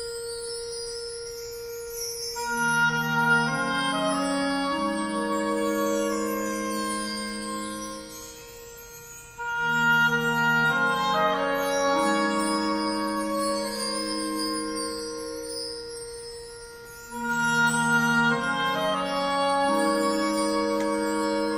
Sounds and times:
Music: 0.0s - 21.5s.

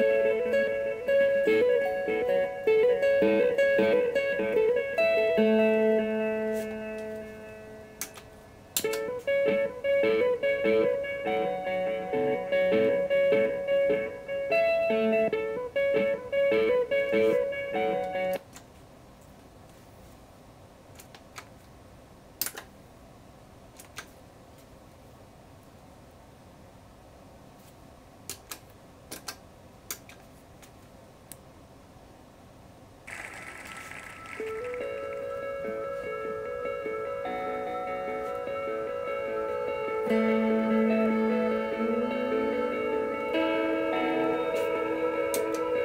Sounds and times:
Electric guitar: 0.0s - 18.4s, 33.1s - 45.8s.

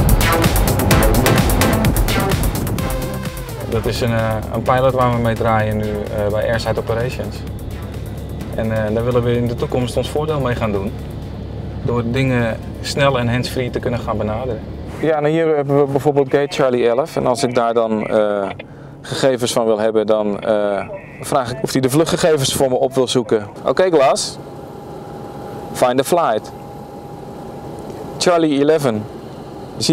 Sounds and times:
Music: 0.0s - 11.4s
Speech: 3.7s - 7.4s, 8.6s - 10.9s, 11.8s - 24.4s, 25.8s - 26.5s, 28.2s - 29.1s.

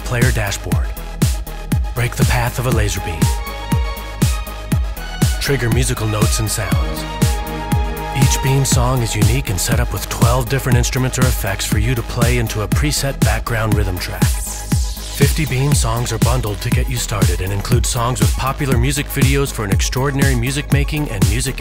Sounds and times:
Speech: 0.0s - 1.0s, 2.0s - 3.4s, 5.4s - 7.1s, 8.2s - 14.4s, 15.2s - 21.6s
Music: 0.0s - 21.6s.

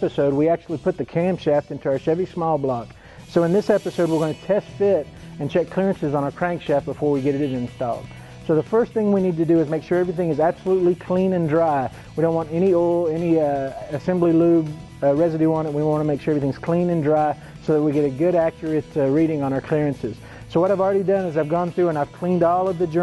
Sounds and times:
Music: 0.0s - 23.0s
Speech: 0.0s - 23.0s.

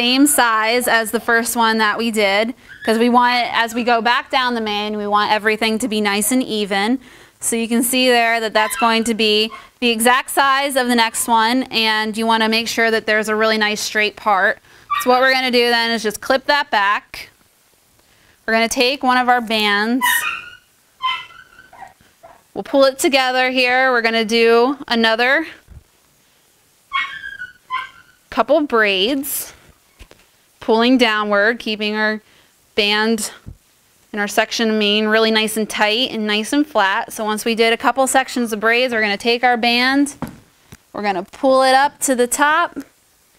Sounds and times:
Speech: 0.0s - 17.3s, 18.5s - 20.2s, 22.6s - 25.6s, 34.2s - 40.2s, 41.0s - 42.9s
Animal: 20.0s - 22.5s, 26.9s - 28.3s.

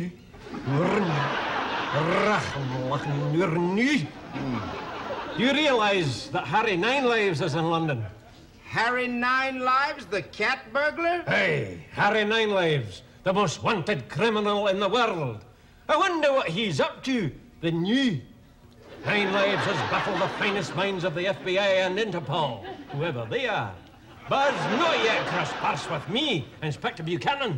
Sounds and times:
Speech: 1.9s - 4.1s, 5.4s - 18.3s, 19.1s - 27.5s.

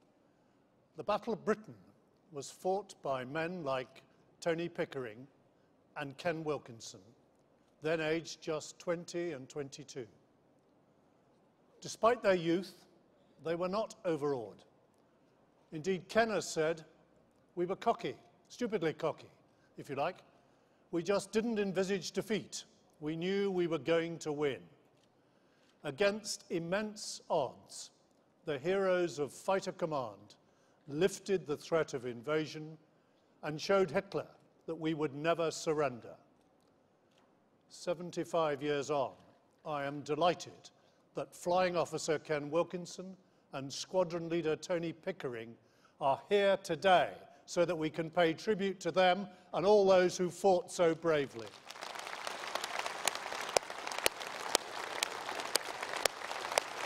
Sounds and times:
Narration, monologue: 0.0s - 52.0s
Male speech, man speaking: 1.0s - 1.8s, 2.4s - 5.3s, 6.0s - 7.1s, 7.8s - 10.2s, 11.8s - 14.7s, 15.7s - 17.0s, 17.6s - 20.3s, 21.0s - 24.8s, 25.8s - 32.8s, 33.4s - 36.3s, 37.7s - 51.5s.

